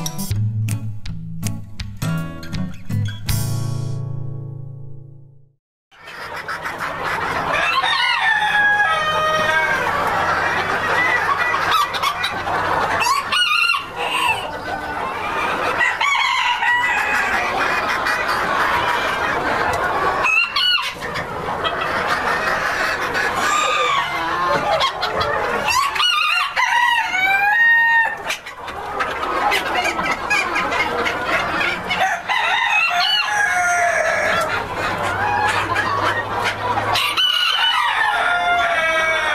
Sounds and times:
Cluck: 6.0 - 39.3
Crowing, cock-a-doodle-doo: 7.6 - 9.8, 15.8 - 17.2, 25.7 - 28.2, 32.0 - 34.4, 37.0 - 39.3.

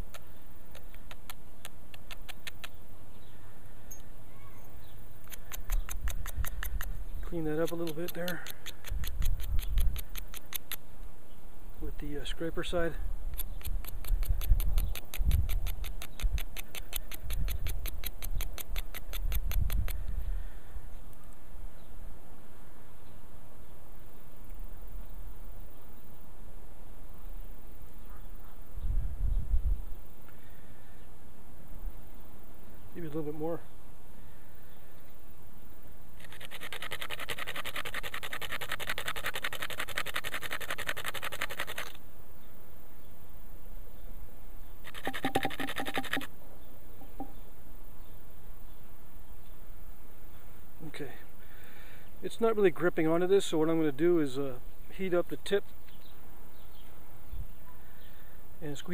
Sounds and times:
Speech: 7.2 - 8.5, 11.8 - 13.0, 33.0 - 33.7, 50.8 - 51.3, 52.2 - 55.6, 58.6 - 58.9.

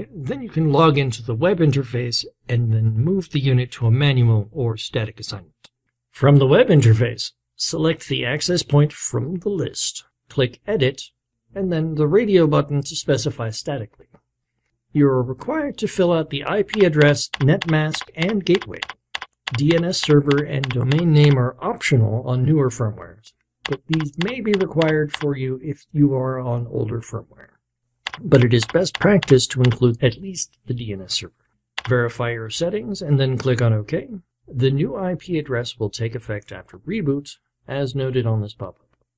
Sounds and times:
Speech: 0.0 - 5.6, 6.2 - 14.2, 14.9 - 18.9, 19.5 - 27.6, 28.2 - 38.9.

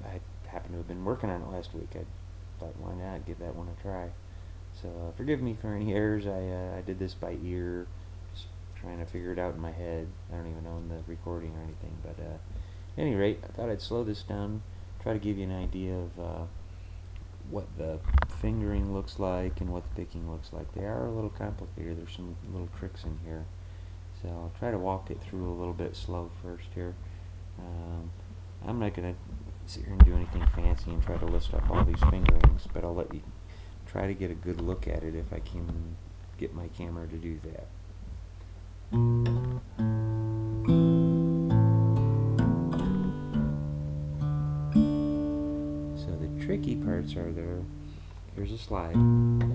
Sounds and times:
Speech: 0.0 - 16.6, 17.4 - 23.5, 24.1 - 27.0, 27.6 - 37.8, 46.0 - 47.7, 48.3 - 49.1.

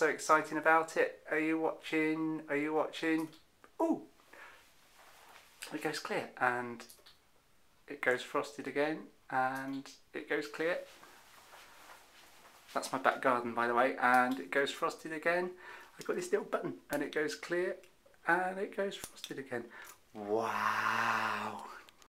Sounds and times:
Speech: 0.0 - 4.1, 5.6 - 6.9, 7.9 - 10.9, 12.7 - 21.8.

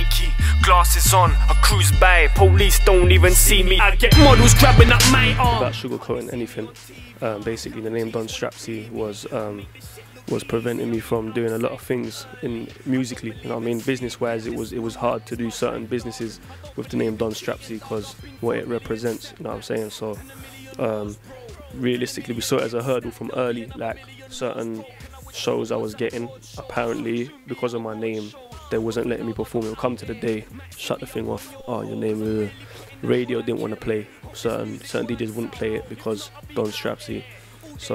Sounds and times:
Music: 0.0 - 37.9
Speech: 1.5 - 9.7, 10.3 - 37.9.

